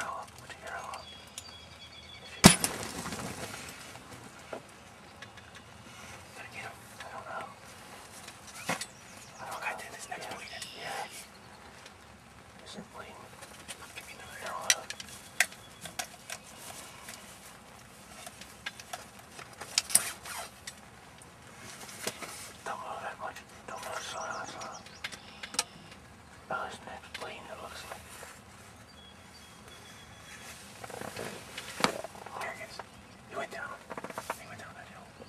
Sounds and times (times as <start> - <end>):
Bird: 0.0 - 3.8, 4.5 - 17.4, 22.1 - 35.2.